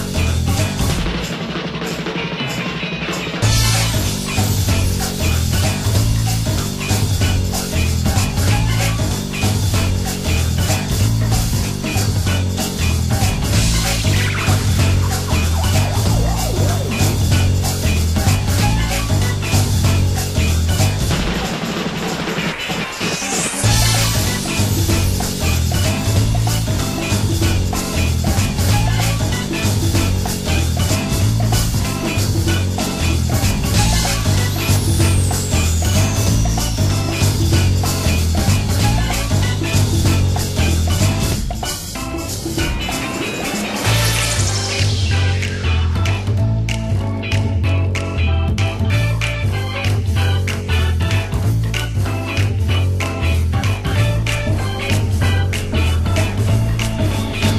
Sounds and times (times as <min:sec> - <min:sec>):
Music: 0:00.0 - 0:57.5.